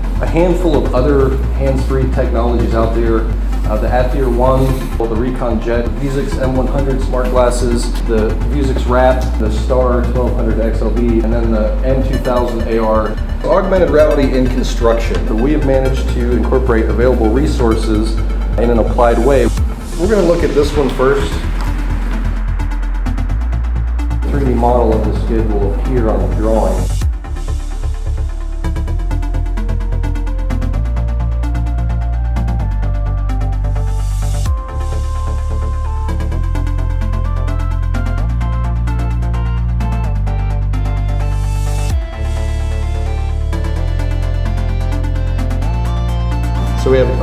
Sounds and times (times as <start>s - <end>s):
Music: 0.0s - 47.2s
Speech: 0.2s - 21.5s, 24.2s - 27.0s, 46.7s - 47.2s.